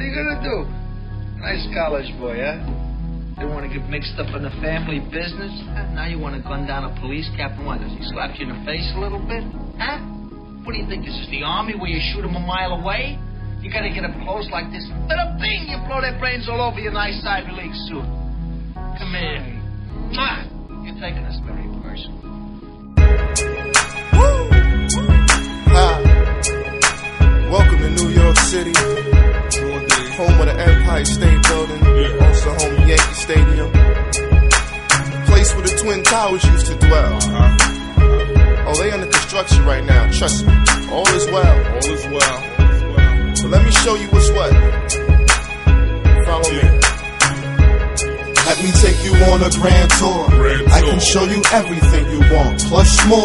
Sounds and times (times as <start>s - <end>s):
Speech: 0.0s - 0.7s, 1.4s - 2.7s, 3.4s - 18.1s, 19.0s - 22.2s, 25.7s - 26.1s, 29.6s - 33.7s, 38.7s - 42.6s, 43.4s - 44.6s, 46.2s - 46.8s, 48.4s - 53.2s
Music: 0.0s - 53.2s.